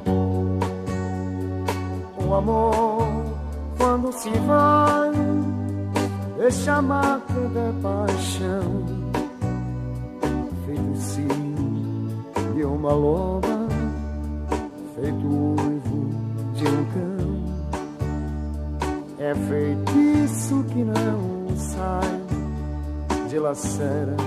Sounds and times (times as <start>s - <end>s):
Blues: 0.0s - 24.2s
Country: 0.0s - 24.2s
Guitar: 0.0s - 24.2s.